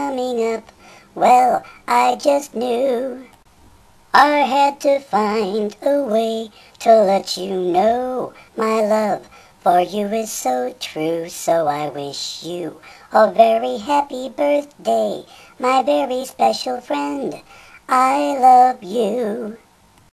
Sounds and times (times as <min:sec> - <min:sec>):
Synthetic singing: 0:00.0 - 0:03.3, 0:04.2 - 0:19.6.